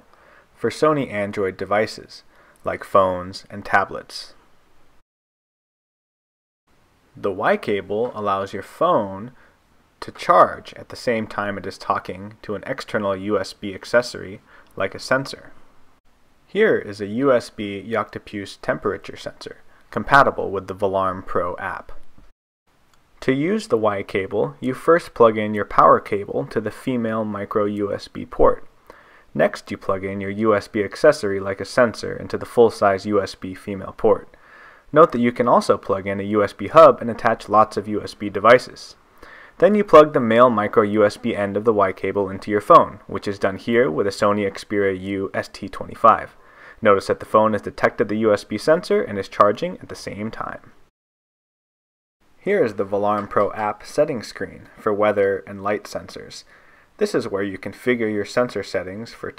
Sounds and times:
Speech: 0.6s - 4.4s, 7.2s - 9.4s, 10.0s - 15.6s, 16.5s - 22.0s, 23.2s - 28.7s, 29.3s - 39.0s, 39.6s - 50.8s, 52.4s - 59.3s.

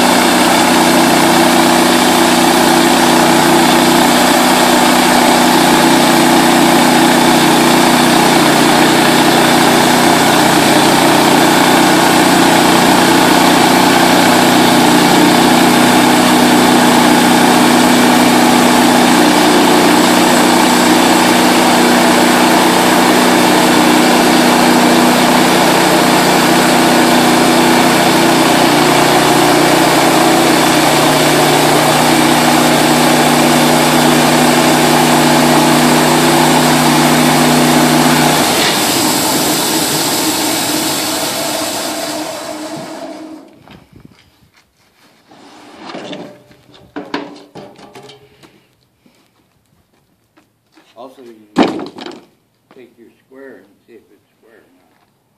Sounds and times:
Wood: 45.4s - 48.6s, 50.4s - 52.4s.

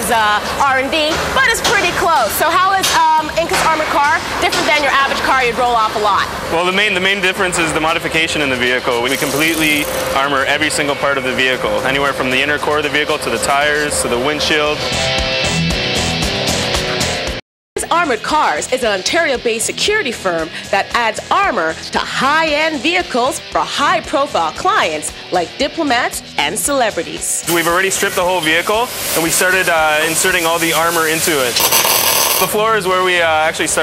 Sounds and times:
Speech: 0.0s - 14.8s, 17.8s - 31.6s, 32.5s - 33.8s
Music: 0.0s - 33.8s.

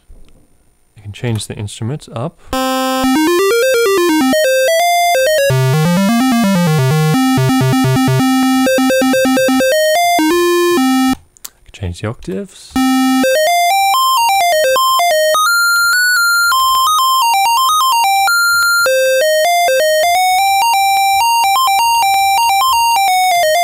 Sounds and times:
Speech: 1.0s - 2.4s, 11.7s - 12.8s
Electronic music: 2.6s - 11.2s, 12.8s - 23.6s.

